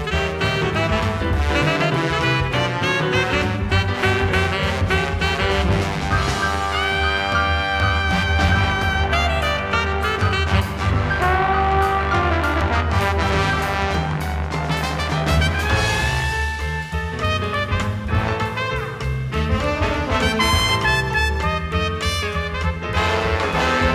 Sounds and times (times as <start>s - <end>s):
Music: 0.0s - 23.9s.